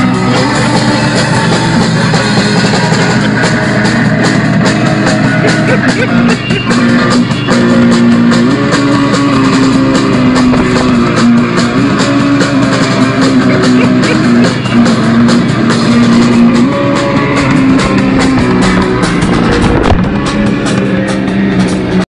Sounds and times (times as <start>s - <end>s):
Motorcycle: 0.0s - 22.1s
Music: 0.0s - 22.1s.